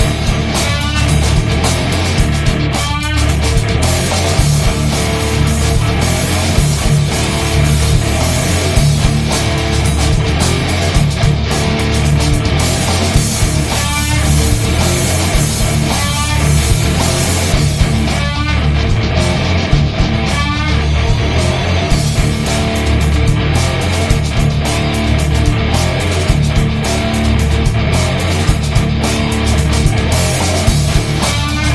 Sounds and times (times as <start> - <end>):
Bass guitar: 0.0 - 31.7
Electric guitar: 0.0 - 31.7.